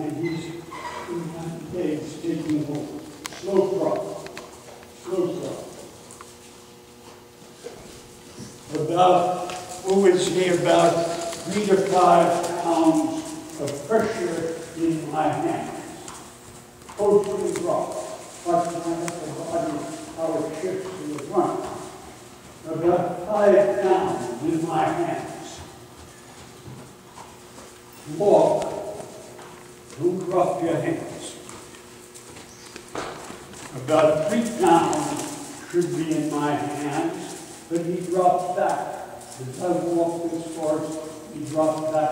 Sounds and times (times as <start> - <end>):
Speech: 0.0 - 4.2, 5.0 - 5.9, 8.7 - 16.1, 17.0 - 22.0, 22.6 - 25.7, 28.0 - 29.2, 29.9 - 31.5, 33.7 - 42.1
Clip-clop: 1.7 - 42.1.